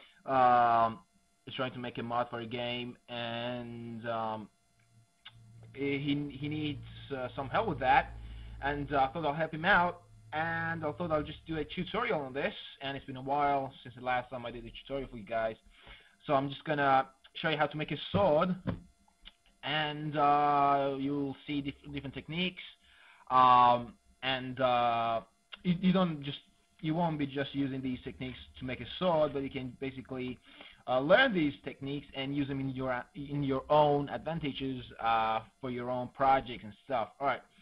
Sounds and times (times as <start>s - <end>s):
Speech: 0.3s - 4.5s, 5.7s - 15.6s, 16.2s - 18.8s, 19.6s - 37.5s.